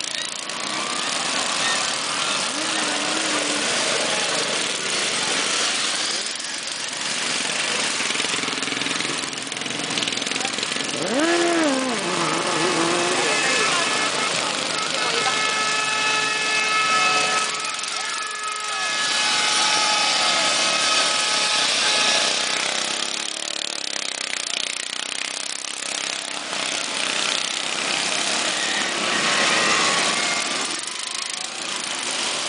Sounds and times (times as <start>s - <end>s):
Vehicle: 0.0s - 32.4s.